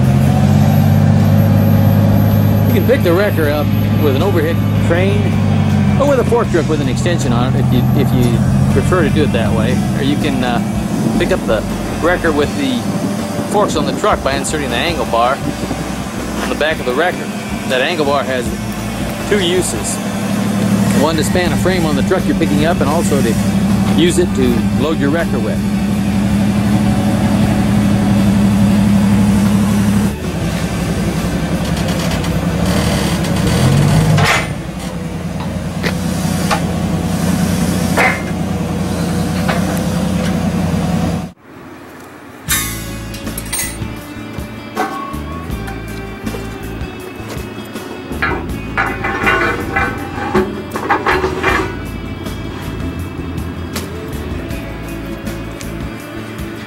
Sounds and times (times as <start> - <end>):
Vehicle: 0.0 - 56.6
Music: 2.5 - 32.2, 42.5 - 56.6
Speech: 2.7 - 5.4, 6.0 - 12.9, 13.5 - 15.5, 16.4 - 18.6, 19.2 - 20.0, 20.9 - 25.7.